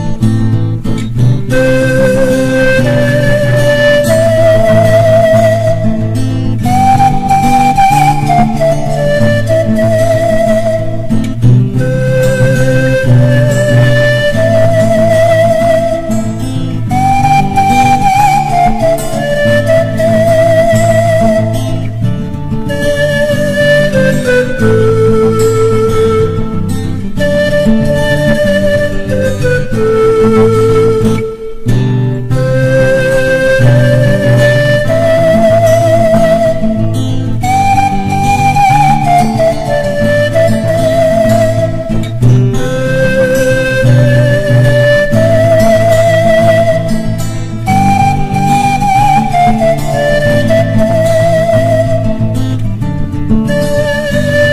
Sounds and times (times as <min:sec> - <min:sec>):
Flute: 0:00.0 - 0:54.5.